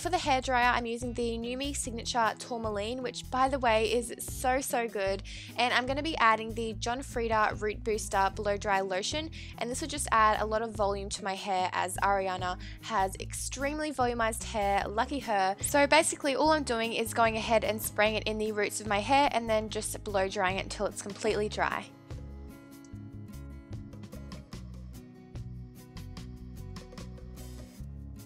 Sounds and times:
Speech: 0.0s - 21.9s
Music: 0.0s - 28.2s.

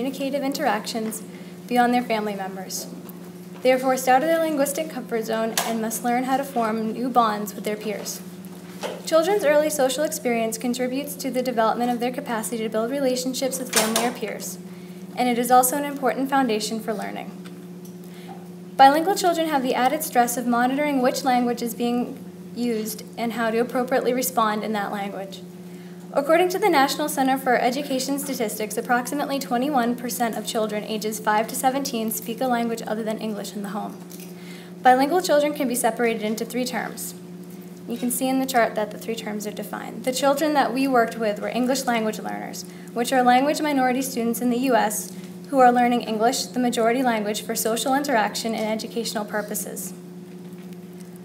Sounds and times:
Female speech, woman speaking: 0.0s - 3.0s, 3.6s - 8.3s, 9.1s - 14.6s, 15.2s - 17.4s, 18.8s - 25.4s, 26.2s - 34.0s, 34.8s - 37.2s, 37.9s - 50.0s
Narration, monologue: 0.0s - 51.2s.

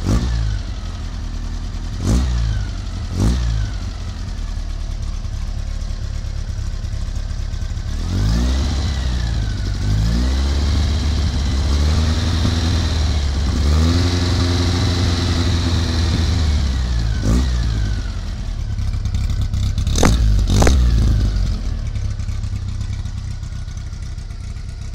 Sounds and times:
Accelerating, revving, vroom: 0.0s - 0.6s, 2.0s - 3.8s, 7.9s - 18.2s, 19.9s - 21.6s
Idling: 0.0s - 24.9s
Vehicle: 0.0s - 24.9s.

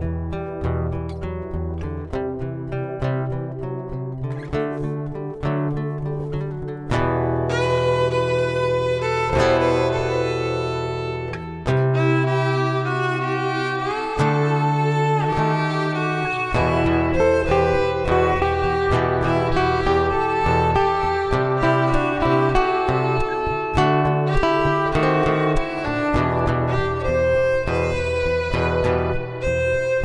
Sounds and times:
Violin, fiddle: 7.5s - 30.0s.

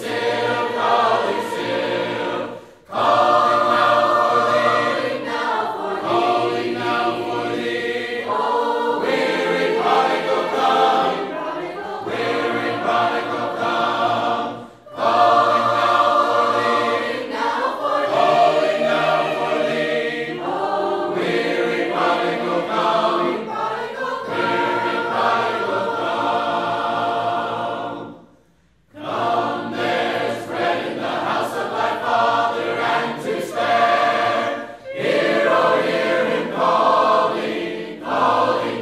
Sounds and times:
Choir: 0.0s - 38.8s.

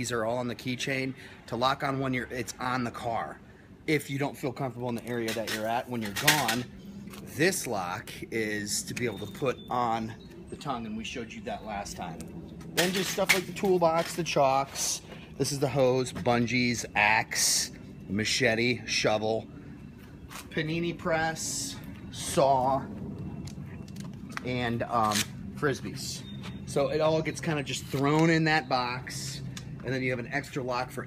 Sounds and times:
Speech: 0.0s - 6.7s, 7.3s - 12.2s, 12.8s - 19.5s, 20.5s - 22.9s, 24.4s - 31.0s.

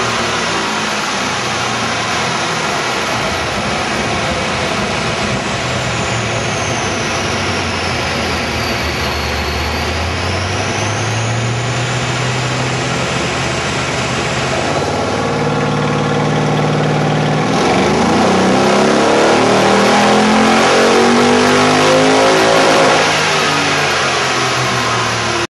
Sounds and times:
Car: 0.0s - 25.5s.

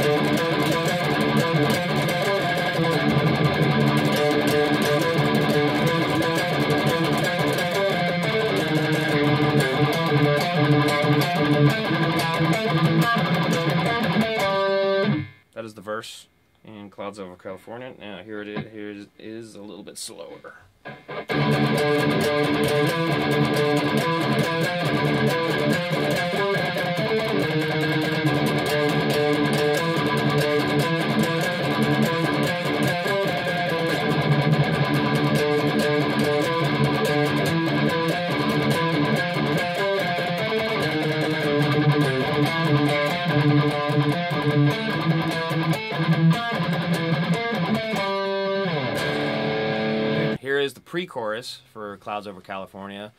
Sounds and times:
Strum: 0.0s - 15.5s, 20.5s - 50.6s
Speech: 15.6s - 20.7s, 50.4s - 53.1s.

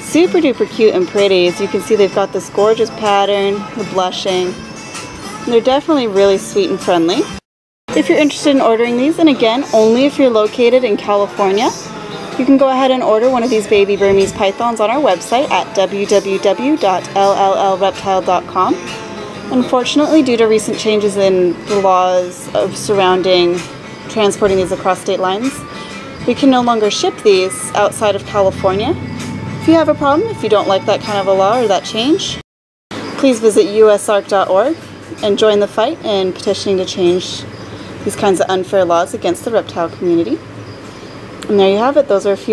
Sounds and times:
Speech: 0.0s - 4.6s, 5.5s - 7.3s, 7.9s - 18.8s, 19.5s - 25.6s, 26.3s - 29.0s, 29.7s - 32.4s, 33.2s - 37.5s, 38.1s - 40.4s, 41.4s - 42.5s
Music: 0.0s - 32.4s, 33.0s - 42.5s.

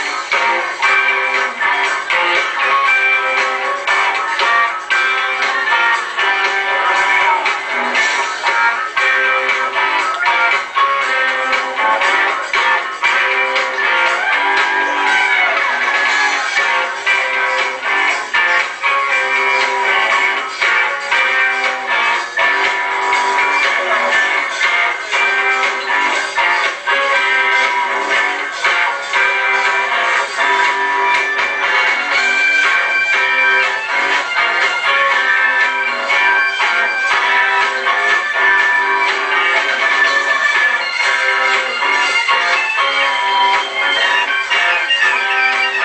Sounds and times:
Music: 0.0s - 45.8s.

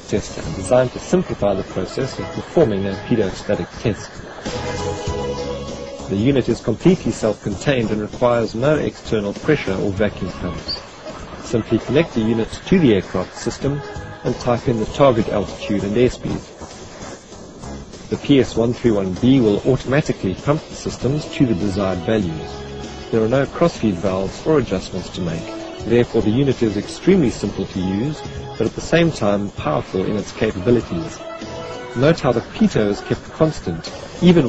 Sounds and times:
Hum: 0.0s - 34.4s.

